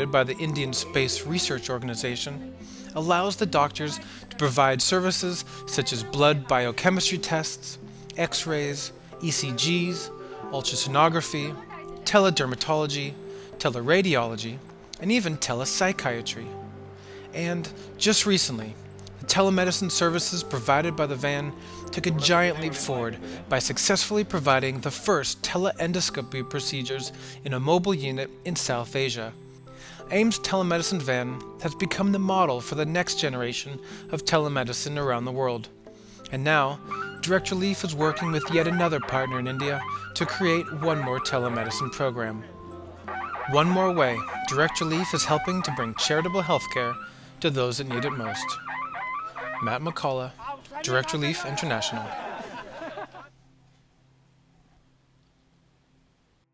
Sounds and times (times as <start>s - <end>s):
Speech: 0.0s - 16.6s, 17.4s - 29.4s, 30.1s - 35.7s, 36.3s - 42.5s, 43.5s - 48.6s, 49.6s - 52.2s
Music: 0.0s - 56.5s.